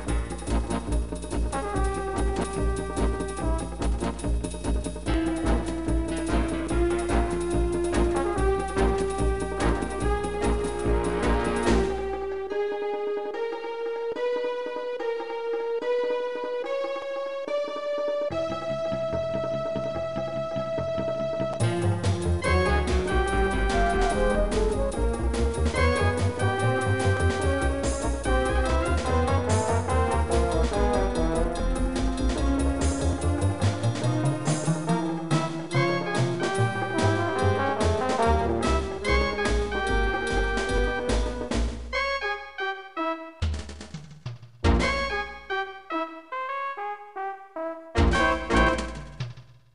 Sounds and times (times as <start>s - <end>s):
Trombone: 0.0s - 12.4s, 21.6s - 43.6s, 44.7s - 49.4s.